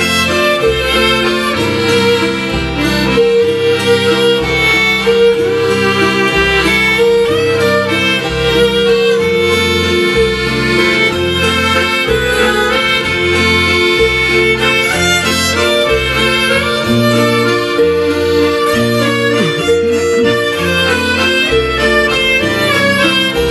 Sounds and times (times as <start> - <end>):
Accordion: 0.0 - 23.5.